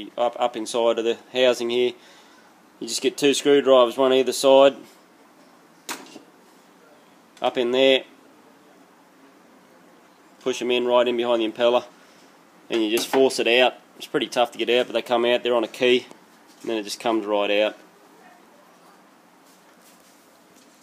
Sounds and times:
Speech: 0.0s - 2.0s, 2.8s - 4.9s, 6.8s - 8.9s, 9.8s - 11.9s, 12.7s - 19.1s.

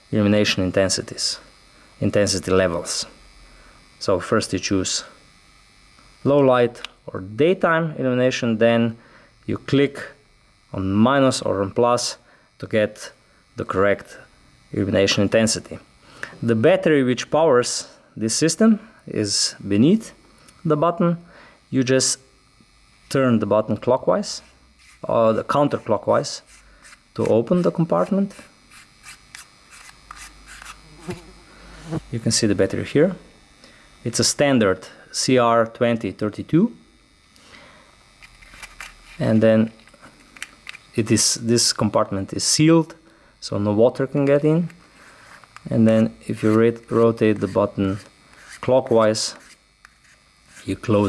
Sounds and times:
Electric shaver, electric razor: 0.0s - 51.0s
Speech: 0.1s - 3.2s, 4.0s - 5.2s, 6.2s - 22.3s, 23.1s - 26.5s, 27.2s - 28.4s, 32.1s - 33.3s, 34.0s - 36.8s, 39.2s - 39.8s, 41.0s - 44.8s, 45.7s - 49.4s, 50.6s - 51.0s.

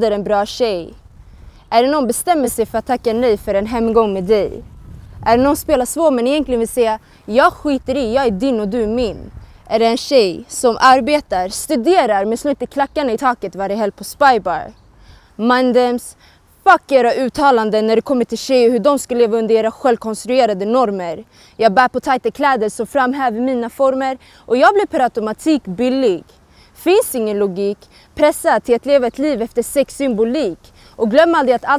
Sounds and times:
Speech: 0.0s - 1.0s, 1.7s - 4.6s, 5.2s - 14.8s, 15.4s - 31.7s.

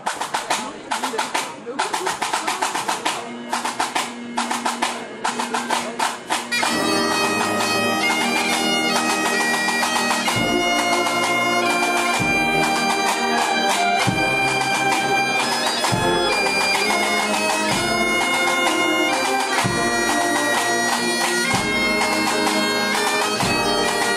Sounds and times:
Speech: 0.0s - 7.6s
Bagpipes: 1.9s - 24.1s.

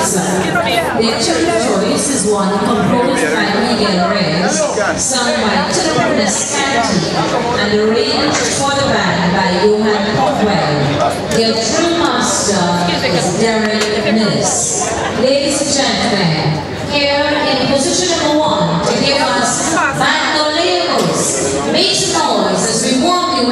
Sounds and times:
Speech: 0.0s - 23.5s.

